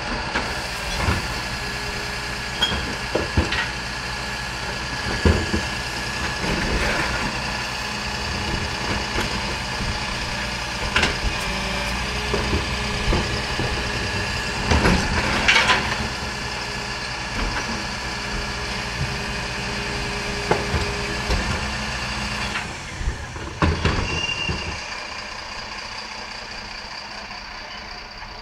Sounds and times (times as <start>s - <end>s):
Outside, rural or natural: 0.0s - 28.4s
Truck: 0.0s - 28.4s
Idling: 0.8s - 28.4s.